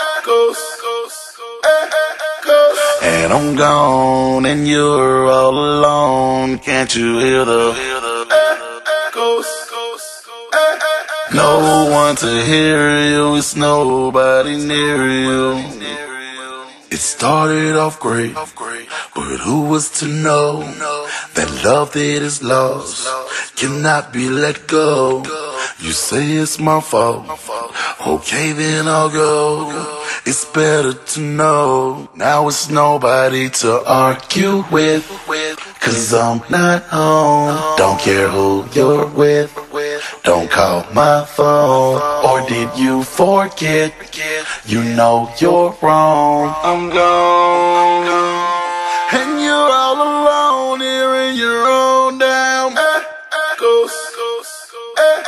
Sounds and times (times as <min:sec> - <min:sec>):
Echo: 0:00.0 - 0:55.2.